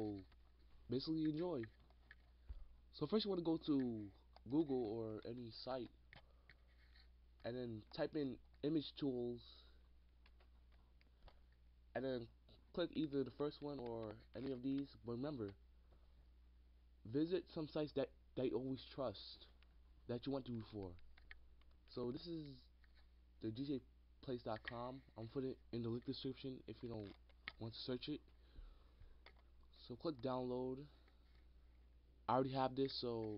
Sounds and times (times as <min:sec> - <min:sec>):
Speech: 0:00.0 - 0:00.3, 0:00.9 - 0:01.8, 0:02.9 - 0:06.0, 0:07.4 - 0:09.8, 0:11.9 - 0:15.6, 0:17.1 - 0:21.0, 0:21.9 - 0:22.7, 0:23.4 - 0:28.3, 0:29.7 - 0:31.0, 0:32.3 - 0:33.3.